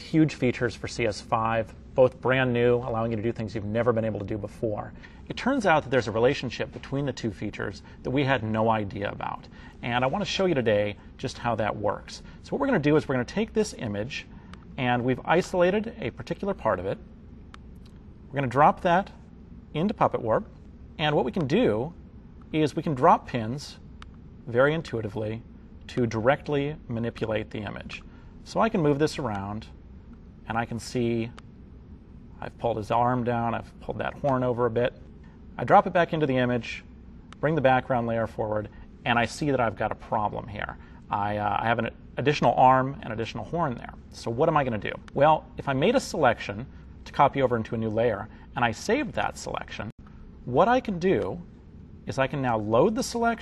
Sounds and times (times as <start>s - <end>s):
Speech: 0.0s - 17.0s, 18.3s - 23.8s, 24.4s - 29.8s, 30.4s - 31.4s, 32.4s - 35.0s, 35.6s - 53.4s.